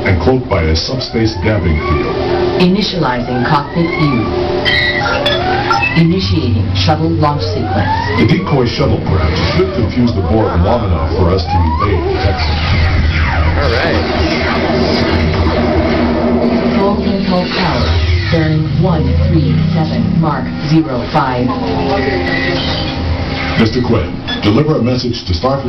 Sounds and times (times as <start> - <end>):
Speech: 0.1 - 4.3, 6.0 - 12.6, 13.6 - 14.1.